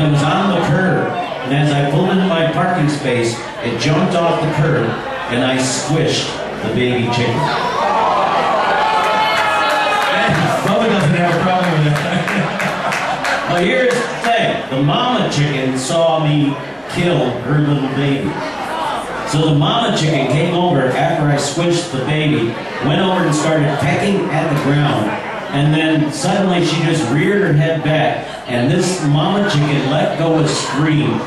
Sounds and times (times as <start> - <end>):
Speech: 0.0 - 7.7, 10.1 - 12.6, 13.5 - 31.2.